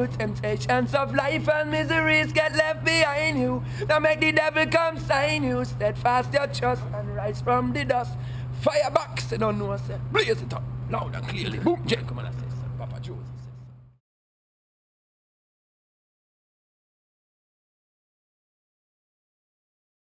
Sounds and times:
Speech: 5.7s - 13.6s.

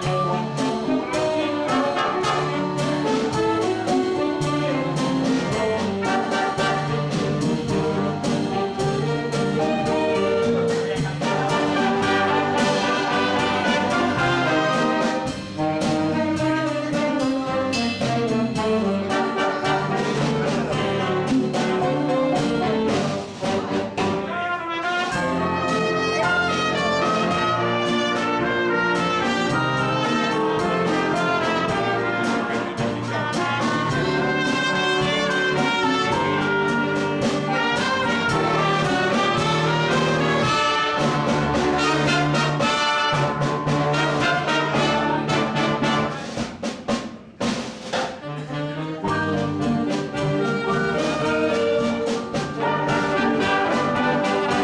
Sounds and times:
Jazz: 0.0s - 54.6s.

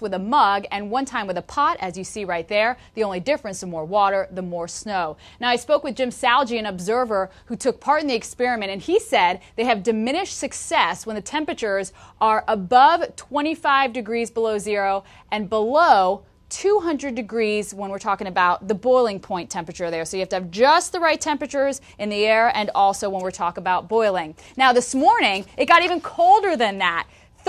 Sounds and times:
Speech: 0.0s - 27.4s.

